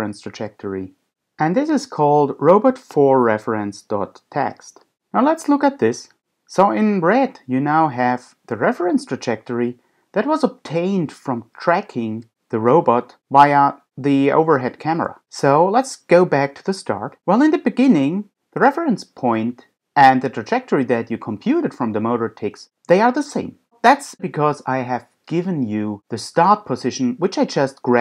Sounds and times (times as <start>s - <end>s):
Speech: 0.0s - 28.0s.